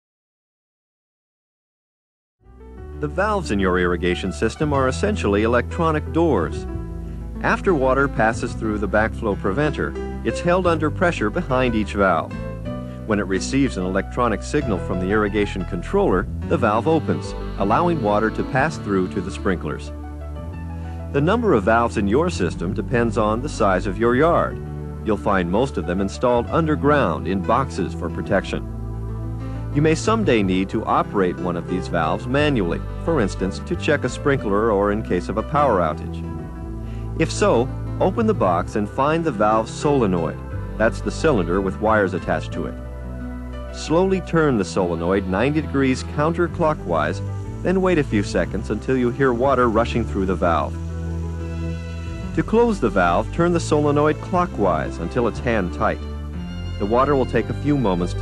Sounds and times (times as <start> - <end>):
Music: 2.4 - 58.2
Speech: 3.0 - 6.7, 7.4 - 12.3, 13.1 - 19.9, 21.2 - 28.6, 29.8 - 36.2, 37.2 - 42.8, 43.8 - 50.8, 52.4 - 56.0, 56.8 - 58.2.